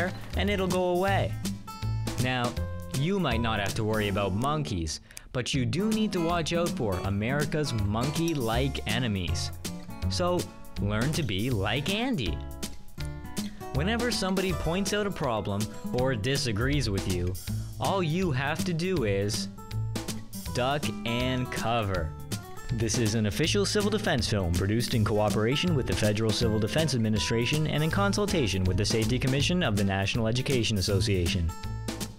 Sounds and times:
Speech: 0.0 - 1.4, 2.2 - 12.4, 13.8 - 19.5, 20.5 - 22.1, 22.7 - 31.6
Music: 0.0 - 32.1.

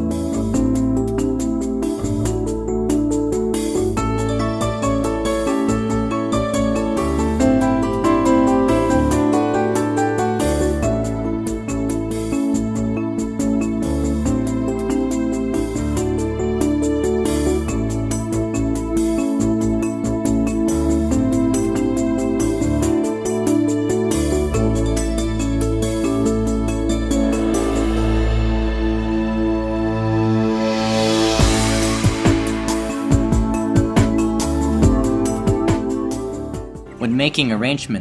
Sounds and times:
Music: 0.0 - 38.0.

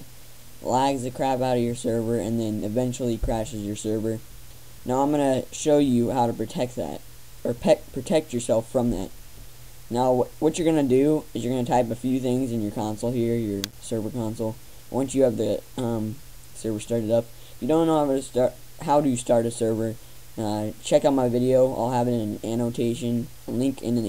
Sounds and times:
Speech: 0.6 - 4.2, 4.9 - 9.2, 9.9 - 24.0.

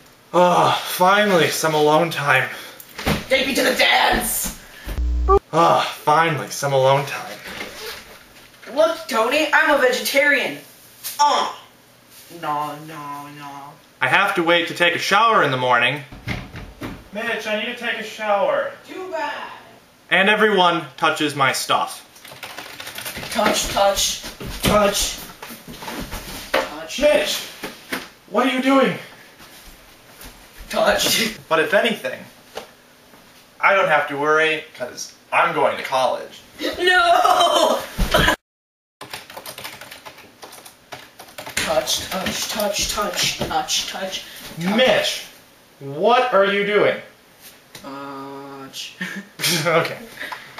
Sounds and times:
Typewriter: 39.0 - 42.7.

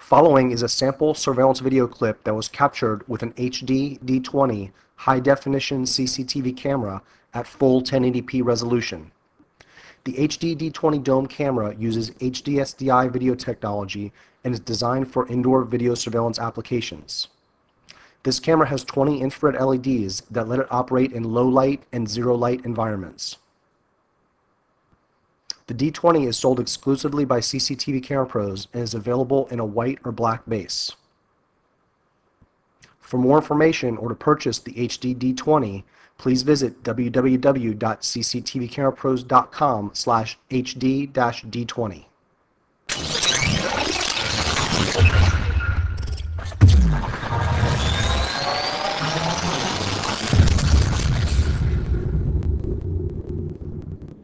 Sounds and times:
Speech: 0.0 - 9.2, 10.0 - 17.3, 18.2 - 23.4, 25.5 - 31.0, 32.9 - 42.2.

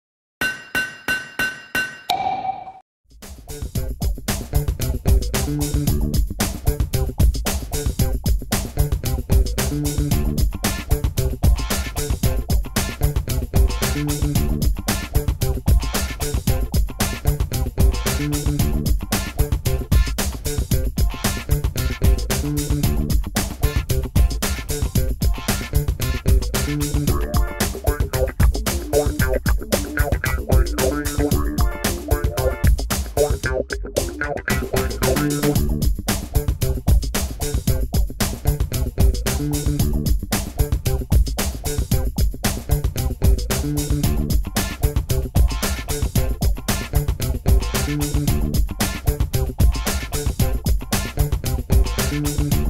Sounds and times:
Music: 3.1 - 52.6.

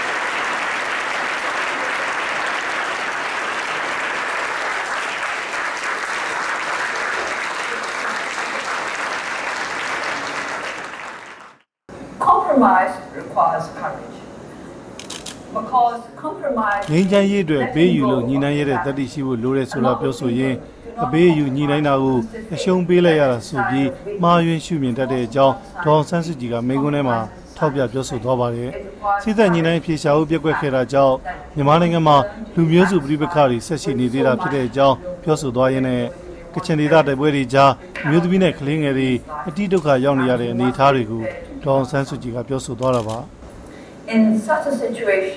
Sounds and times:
Narration, monologue: 11.9 - 45.3
Female speech, woman speaking: 12.2 - 14.2, 15.6 - 35.2, 38.0 - 42.0, 44.1 - 45.3.

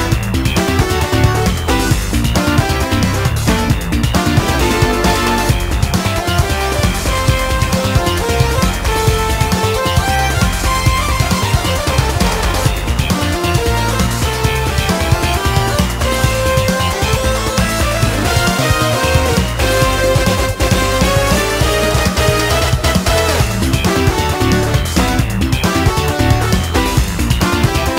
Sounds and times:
Music: 0.0 - 27.9.

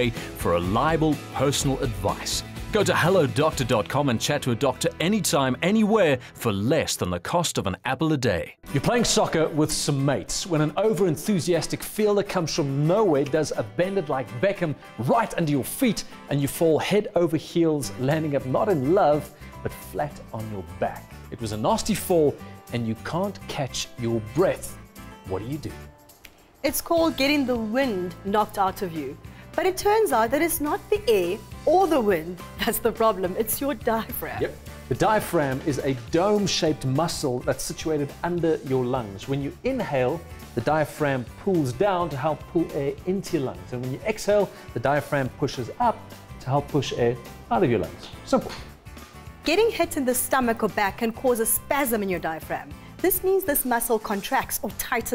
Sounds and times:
Speech: 0.0 - 24.7, 26.7 - 48.7
Music: 0.0 - 55.1.

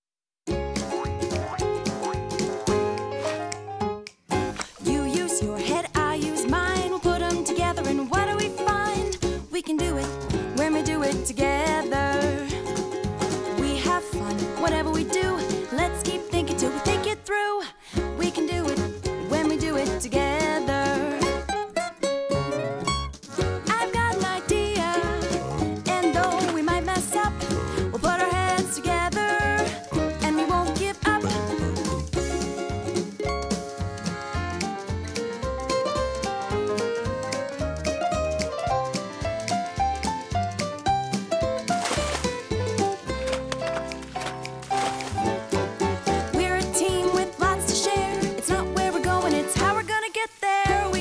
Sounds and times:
Music for children: 0.5 - 49.9, 50.6 - 51.0.

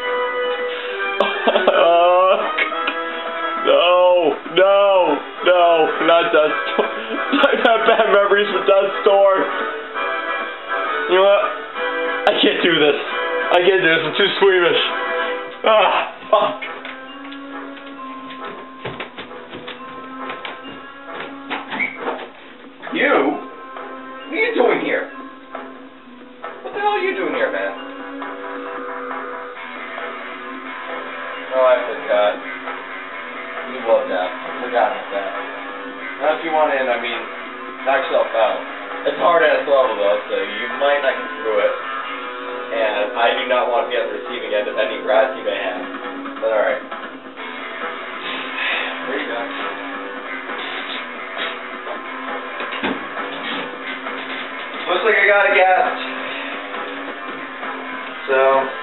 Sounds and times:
Music: 0.0 - 58.8
Speech: 12.3 - 14.9, 26.6 - 27.8, 33.7 - 35.4, 36.2 - 37.3, 37.9 - 41.8, 42.7 - 45.8, 46.4 - 46.8, 54.8 - 56.0.

